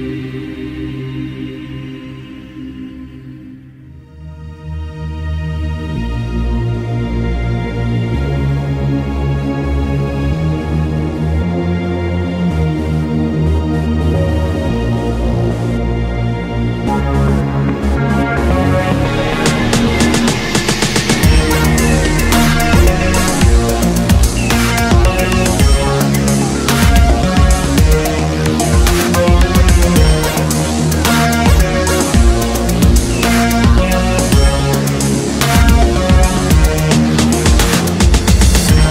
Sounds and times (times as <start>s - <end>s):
Music: 0.0s - 38.9s.